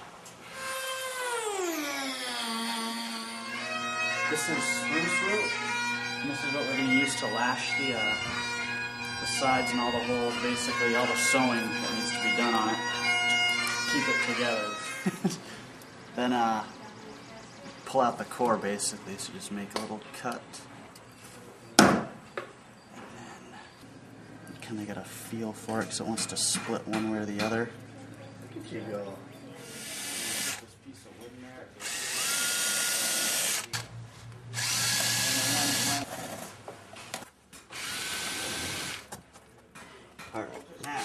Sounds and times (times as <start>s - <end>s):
Drill: 0.5s - 3.6s, 29.6s - 30.7s, 31.8s - 33.8s, 34.6s - 36.2s, 37.7s - 39.1s.